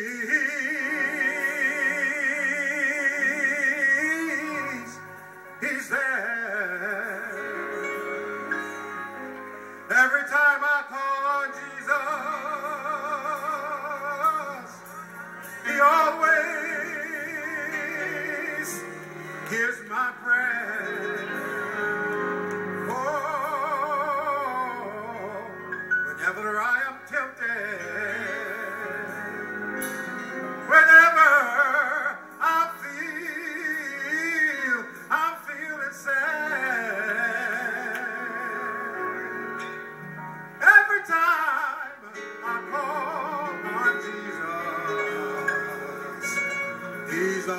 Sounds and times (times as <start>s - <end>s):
Male singing: 0.0s - 7.9s, 9.9s - 15.0s, 15.6s - 22.2s, 22.8s - 29.3s, 30.7s - 39.5s, 40.6s - 47.5s
Music: 0.0s - 47.5s.